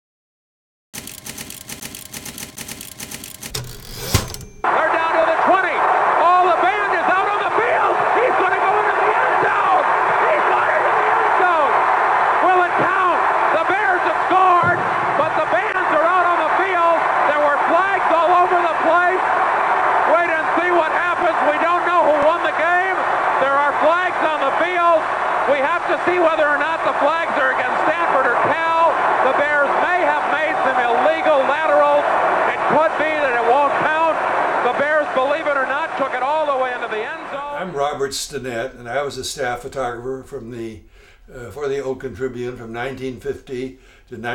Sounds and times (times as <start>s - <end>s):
Speech: 4.7s - 11.7s, 12.4s - 19.2s, 20.1s - 44.3s.